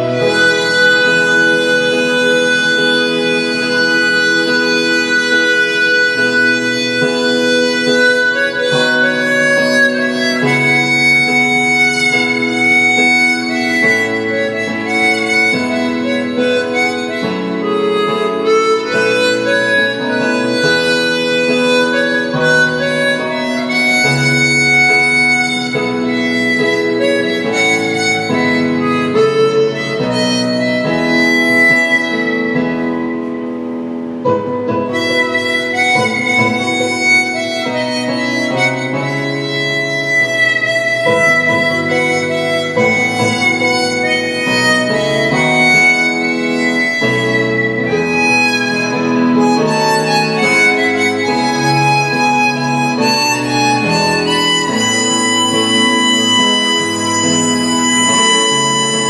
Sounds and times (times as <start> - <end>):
Harmonica: 0.0 - 59.1
Wind instrument, woodwind instrument: 0.0 - 59.1.